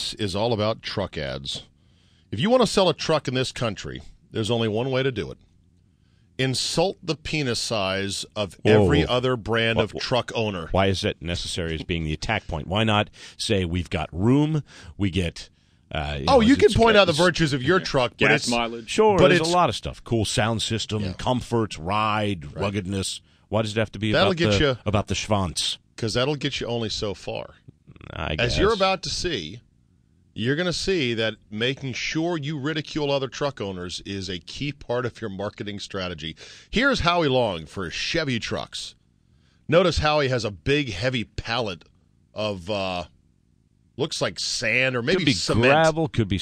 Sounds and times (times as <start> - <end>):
Speech: 0.0 - 1.6, 2.4 - 5.4, 6.4 - 29.6, 30.4 - 38.9, 39.7 - 41.8, 42.4 - 43.1, 44.0 - 46.4.